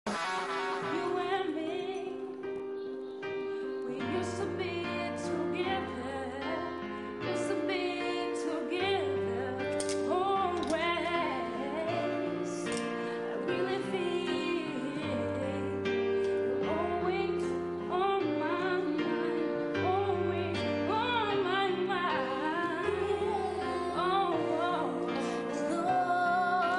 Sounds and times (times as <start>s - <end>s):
Singing: 0.8s - 26.7s.